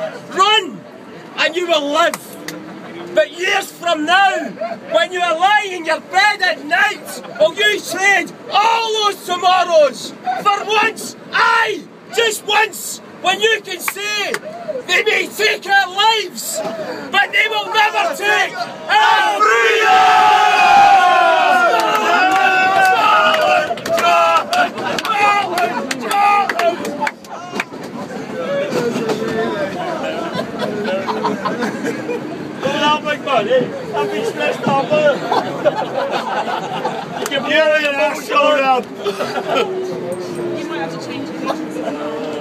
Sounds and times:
Male speech, man speaking: 0.0s - 0.8s, 1.4s - 2.4s, 3.0s - 19.0s, 25.0s - 27.5s, 28.3s - 31.4s, 32.6s - 35.4s, 37.2s - 39.2s, 40.6s - 42.4s.

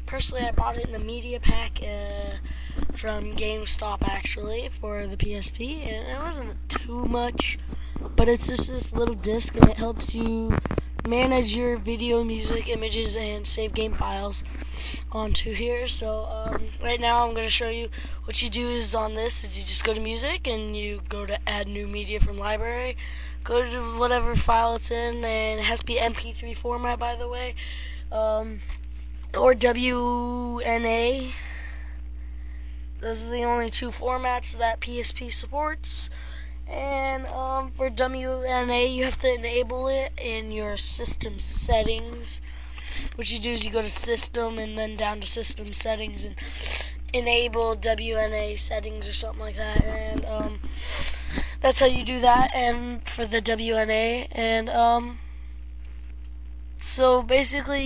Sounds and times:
Speech: 0.0s - 7.6s, 8.2s - 28.7s, 29.3s - 31.4s, 33.0s - 42.4s, 43.0s - 50.6s, 51.6s - 55.2s, 56.8s - 57.8s.

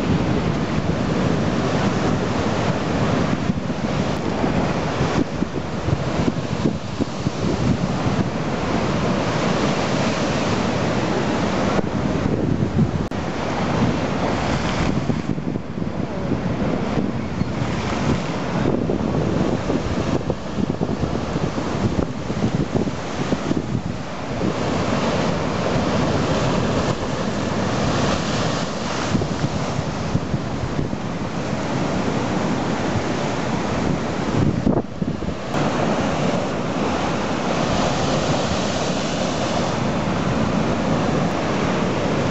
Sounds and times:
Outside, rural or natural: 0.0s - 42.3s.

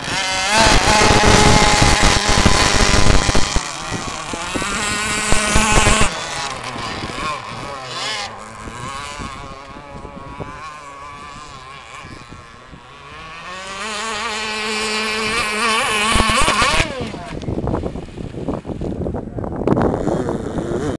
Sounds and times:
Motorboat, speedboat: 0.0s - 20.9s.

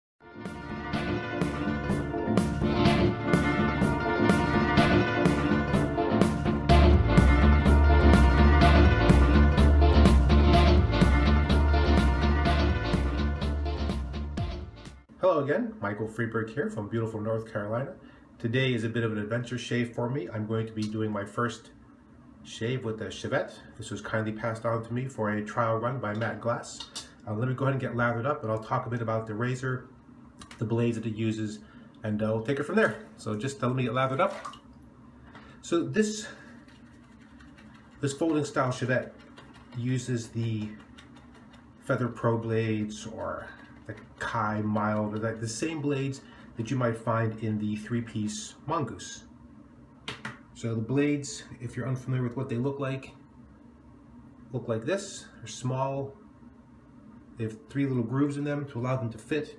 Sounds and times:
Music: 0.2s - 15.1s.

